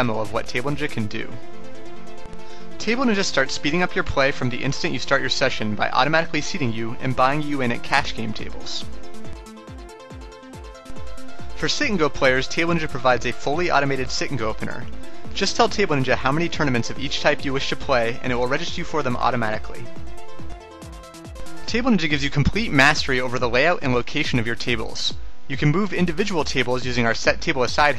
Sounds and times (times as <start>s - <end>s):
Speech: 0.0s - 1.4s, 2.8s - 8.9s, 11.6s - 19.9s, 21.7s - 27.9s
Music: 0.0s - 27.9s.